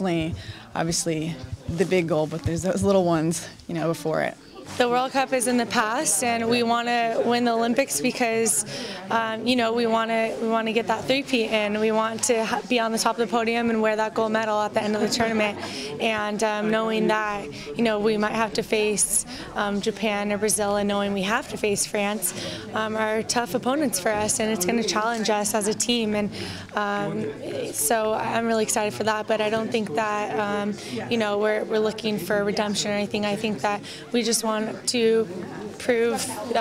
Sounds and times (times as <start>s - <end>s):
Female speech, woman speaking: 0.0s - 36.6s.